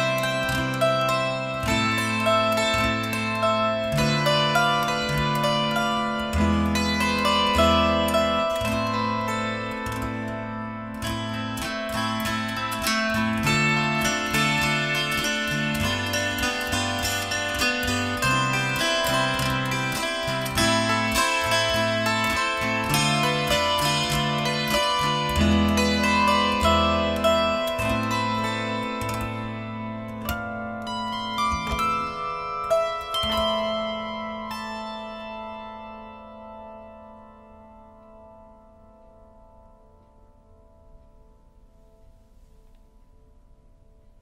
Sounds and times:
Zither: 0.0 - 44.2.

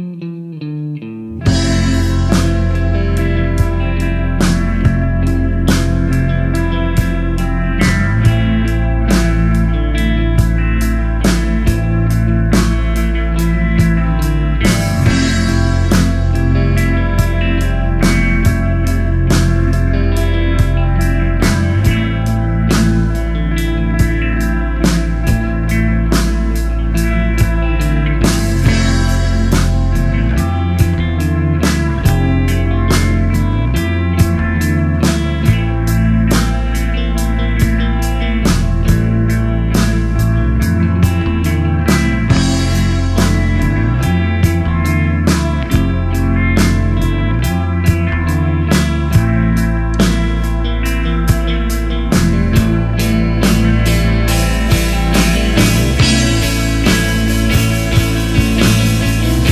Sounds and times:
Music: 0.0 - 59.5.

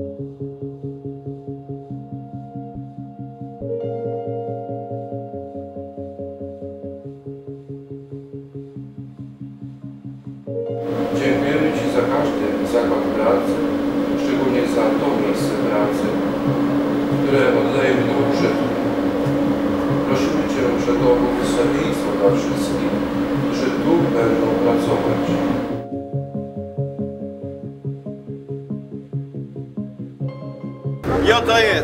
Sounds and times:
Music: 0.0 - 31.8
Speech: 11.1 - 16.2, 17.2 - 18.7, 20.0 - 25.6, 31.1 - 31.8.

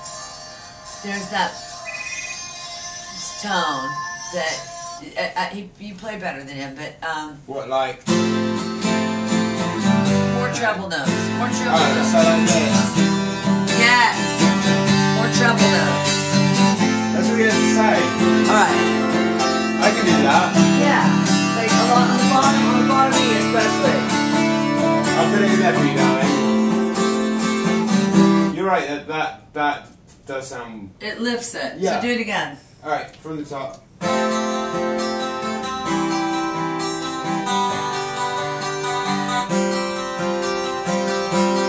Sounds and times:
Music: 0.0 - 5.2, 8.0 - 28.7, 34.0 - 41.6.

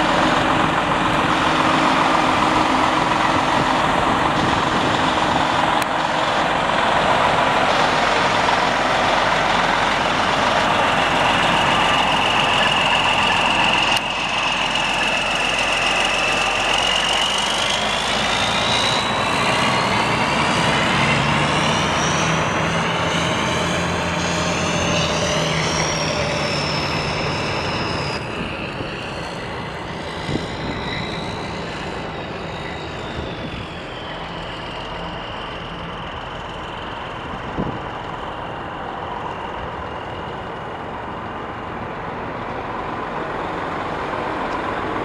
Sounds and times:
Truck: 0.0 - 45.0.

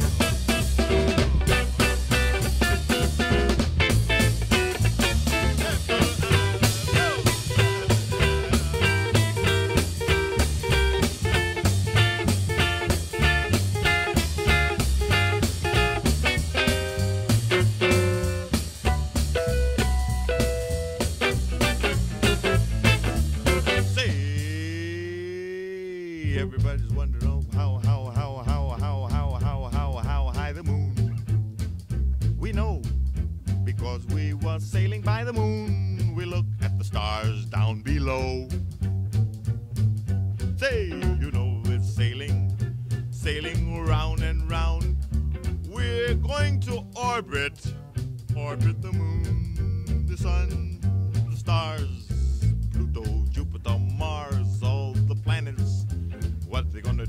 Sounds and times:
Music: 0.0 - 25.0, 26.2 - 57.0.

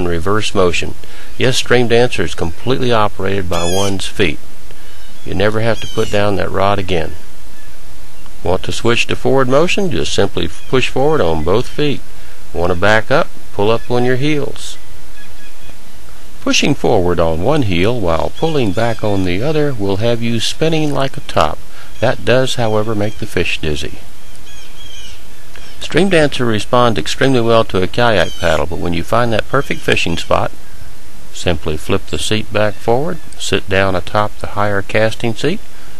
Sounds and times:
Speech: 0.0 - 4.4, 5.3 - 7.2, 8.4 - 14.8, 16.4 - 24.0, 25.8 - 30.6, 31.3 - 35.6.

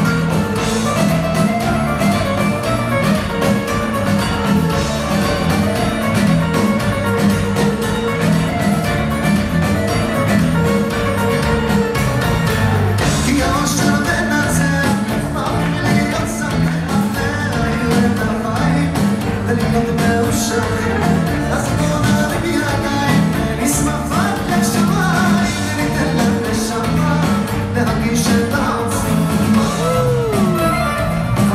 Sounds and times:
Music: 0.0 - 31.5
Male singing: 13.0 - 30.7.

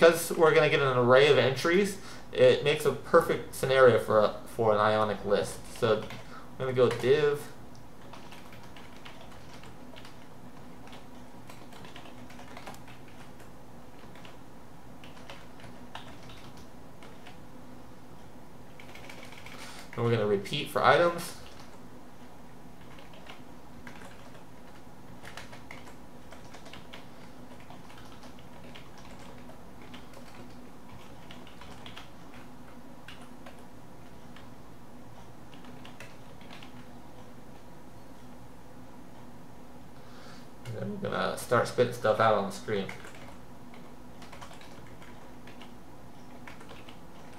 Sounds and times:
Inside, small room: 0.0 - 47.3.

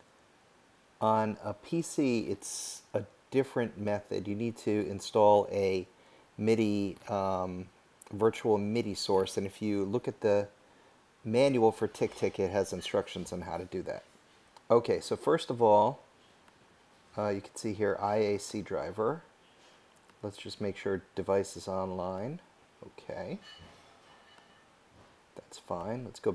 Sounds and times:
Speech: 1.0 - 10.6, 11.3 - 14.1, 14.7 - 16.1, 17.1 - 19.3, 20.2 - 23.5, 25.4 - 26.3.

